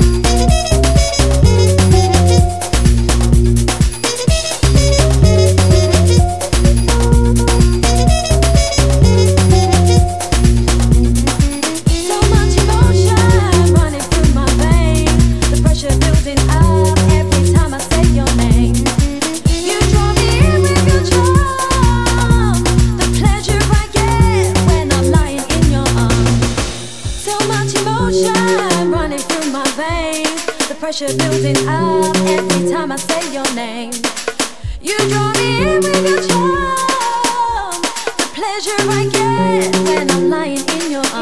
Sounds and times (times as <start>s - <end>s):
Music: 0.0s - 41.2s.